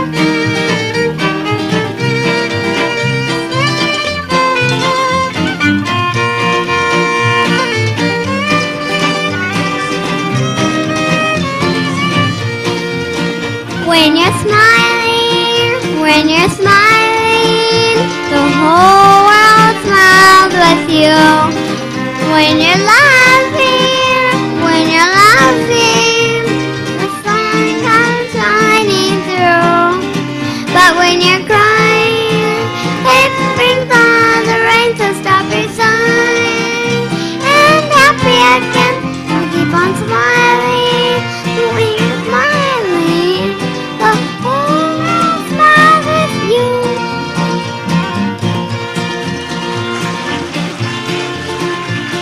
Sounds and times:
Music: 0.0s - 52.2s
Child singing: 13.8s - 21.6s, 22.2s - 47.2s.

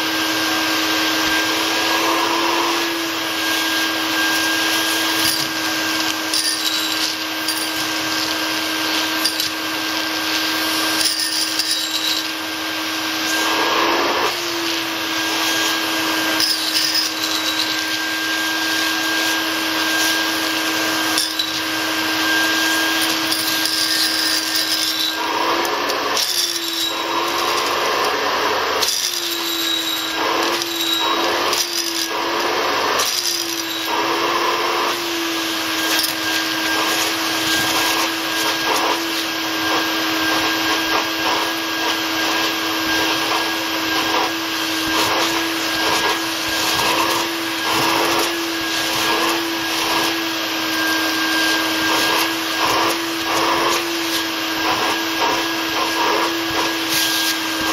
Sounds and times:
Vacuum cleaner: 0.0s - 57.7s.

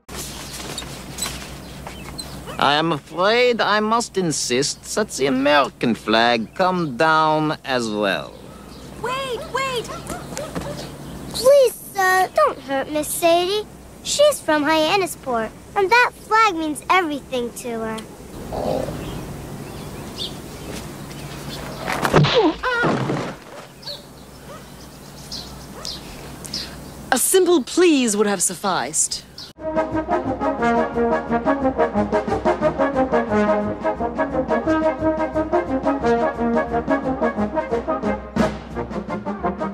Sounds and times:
Outside, rural or natural: 0.0s - 39.7s
Music: 29.6s - 39.7s.

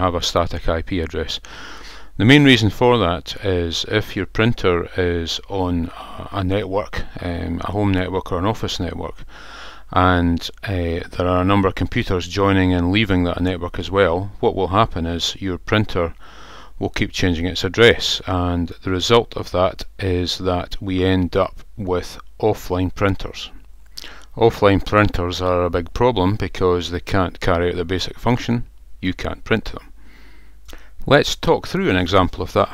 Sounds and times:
Speech: 0.0s - 1.5s, 2.2s - 9.3s, 9.9s - 16.2s, 16.8s - 29.9s, 31.0s - 32.7s.

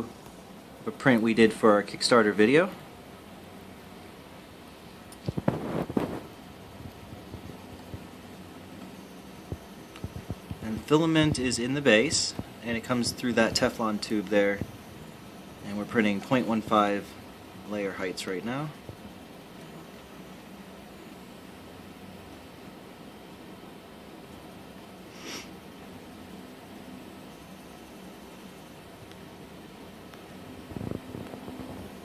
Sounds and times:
Speech: 0.8s - 2.8s, 10.6s - 14.7s, 15.6s - 18.8s.

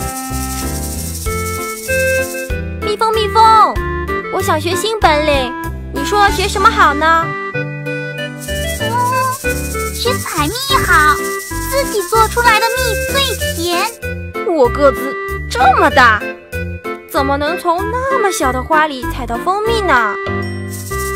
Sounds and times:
Music for children: 0.0s - 21.1s
Speech: 2.9s - 7.2s, 10.0s - 16.2s, 17.1s - 20.2s.

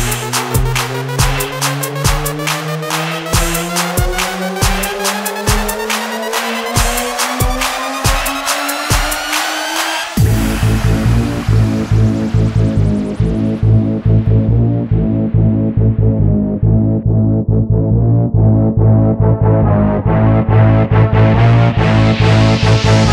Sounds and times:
Music: 0.0s - 23.1s.

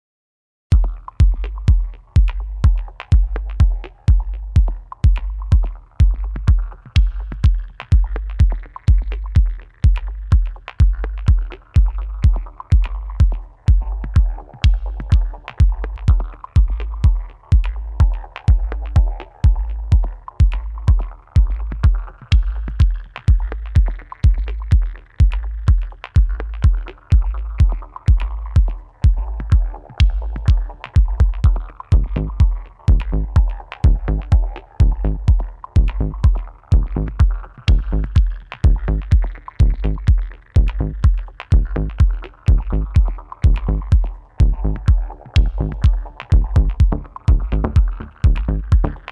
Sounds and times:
House music: 0.8s - 49.1s.

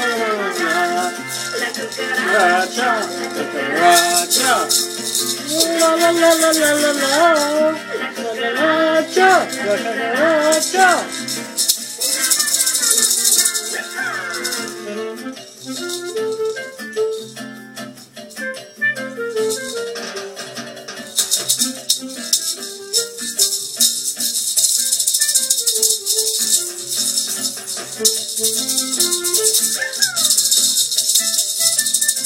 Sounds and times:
Maraca: 0.0s - 32.2s.

